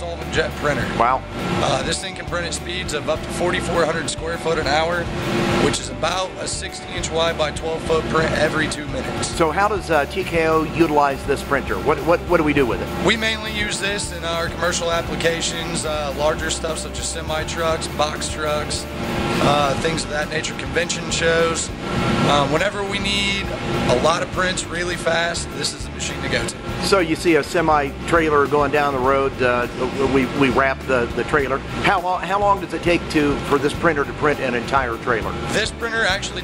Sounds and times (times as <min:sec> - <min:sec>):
Speech: 0:00.0 - 0:05.0, 0:05.6 - 0:18.8, 0:19.4 - 0:21.7, 0:22.3 - 0:36.4
Music: 0:00.0 - 0:36.4.